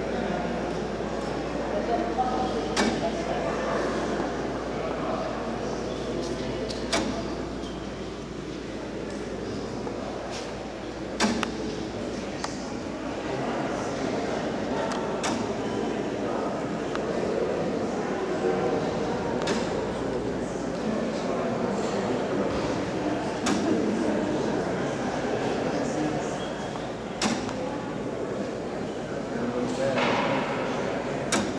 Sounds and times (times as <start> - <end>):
Speech: 0.0 - 31.5.